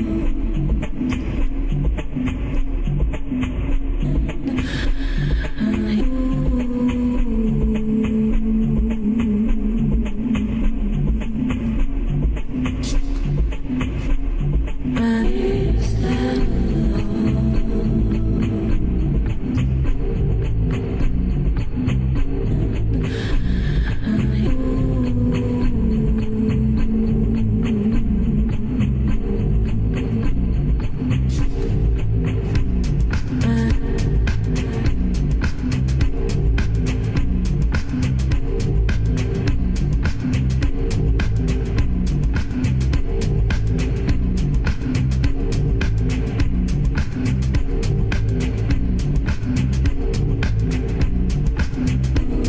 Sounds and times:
Music: 0.0s - 52.4s.

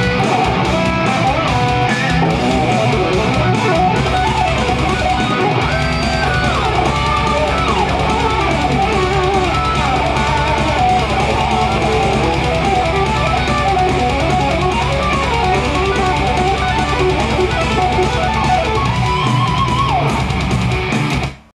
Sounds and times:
Strum: 0.0s - 21.3s
Bass guitar: 0.0s - 21.5s.

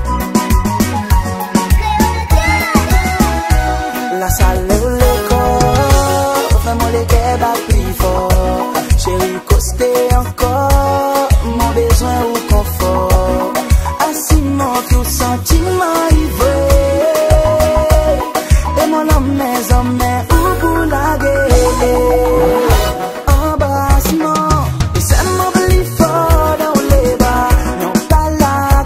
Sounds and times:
Music: 0.0s - 28.8s.

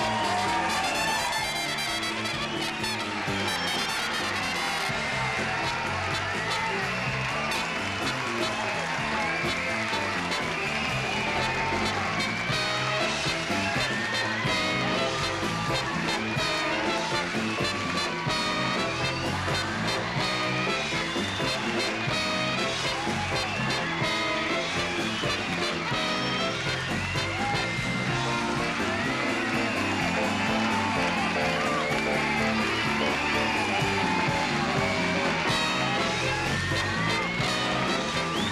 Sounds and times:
Music: 0.0s - 38.5s.

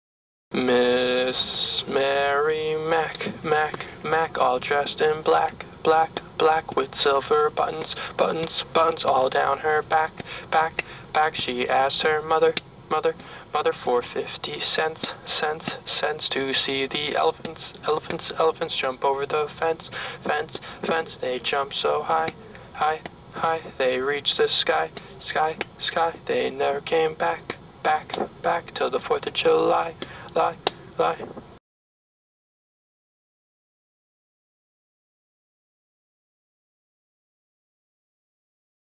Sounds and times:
Speech: 0.6s - 31.4s.

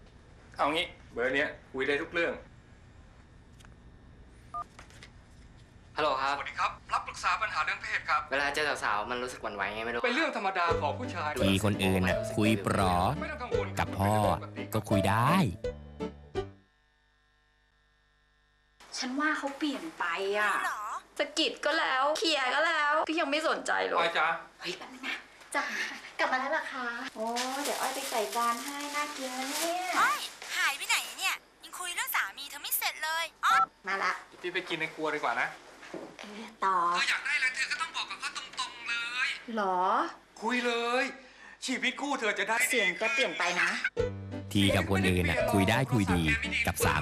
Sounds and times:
Speech: 10.7s - 15.6s, 44.5s - 47.0s.

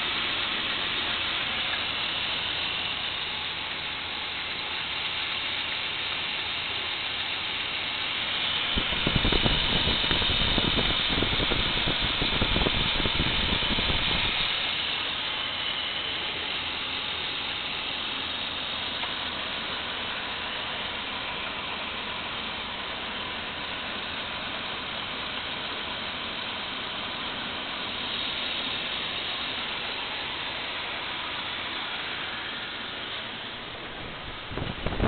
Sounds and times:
Idling: 0.0s - 35.0s
Medium engine (mid frequency): 0.0s - 35.0s
Vehicle: 0.0s - 35.0s.

